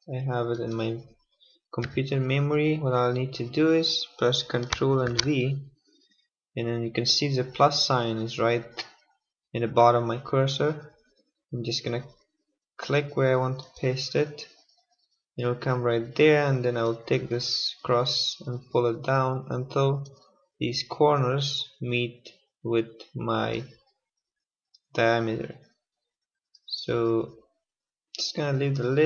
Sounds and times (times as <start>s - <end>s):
Speech: 0.0s - 1.2s, 1.8s - 5.7s, 6.6s - 9.0s, 9.6s - 11.0s, 11.6s - 12.2s, 12.8s - 14.6s, 15.4s - 23.8s, 25.0s - 25.7s, 26.7s - 27.4s, 28.2s - 29.0s.